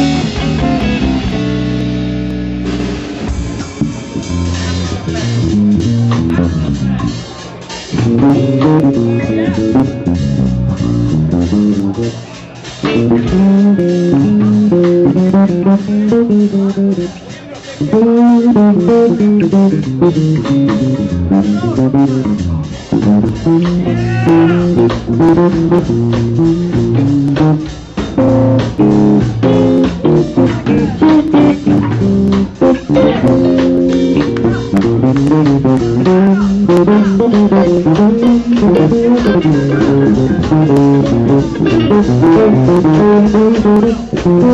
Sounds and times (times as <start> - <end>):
Bass guitar: 0.0 - 44.5
Speech: 4.0 - 20.0, 21.0 - 25.5, 29.9 - 42.8.